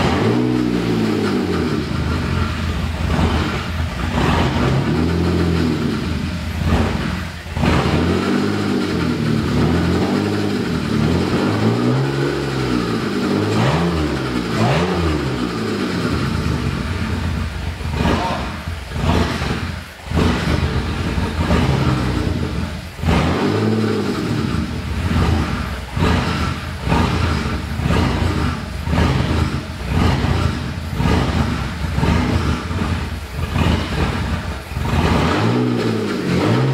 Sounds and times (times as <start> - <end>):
Accelerating, revving, vroom: 0.0 - 1.9, 3.1 - 5.9, 7.6 - 16.3, 18.0 - 20.6, 23.0 - 36.7
Car: 0.0 - 36.7
Idling: 0.0 - 36.7
Medium engine (mid frequency): 0.0 - 36.7.